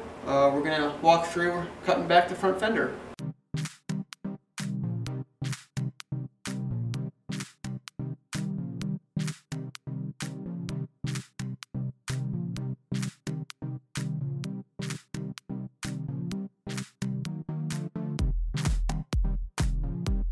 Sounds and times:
Music: 3.2 - 20.3.

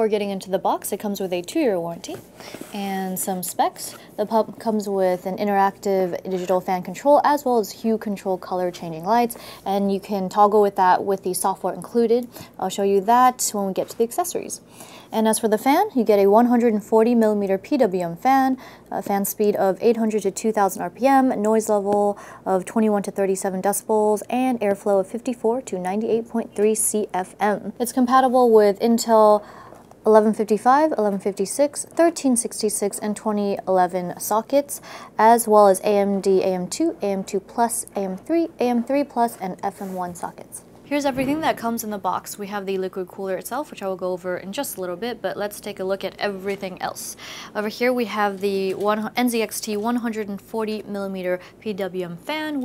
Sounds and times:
Speech: 0.0 - 2.2, 2.8 - 14.6, 15.2 - 29.4, 30.1 - 52.6.

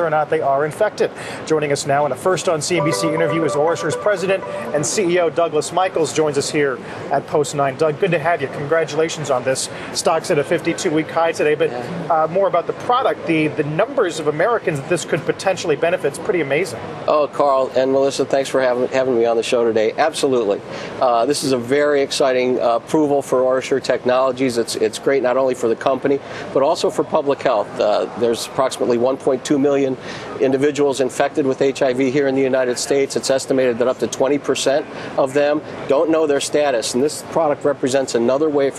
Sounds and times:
Speech: 0.0 - 6.4, 7.2 - 38.7.

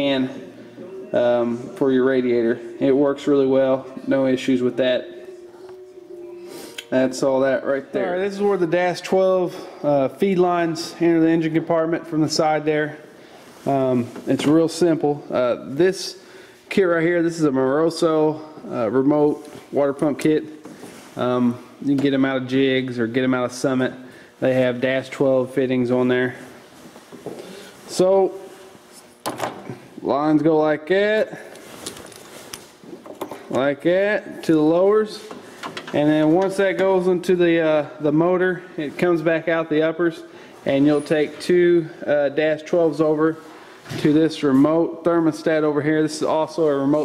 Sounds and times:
Speech: 0.0 - 5.9, 6.8 - 20.6, 21.2 - 26.6, 27.9 - 28.5, 30.0 - 31.5, 33.5 - 35.3, 36.0 - 47.0.

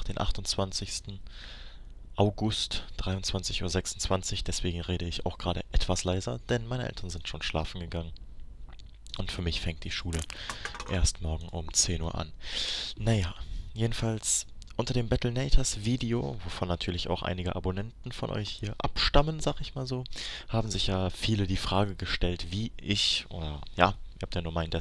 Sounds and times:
Speech: 0.0 - 1.2, 2.2 - 8.2, 9.1 - 10.2, 10.9 - 12.4, 13.0 - 24.8.

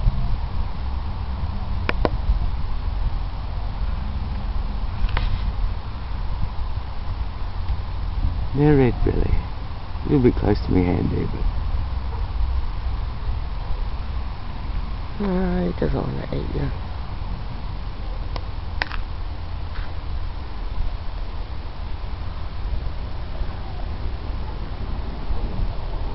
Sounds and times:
Outside, rural or natural: 0.0 - 26.1
Speech: 8.6 - 9.5, 10.1 - 11.5, 15.2 - 16.8.

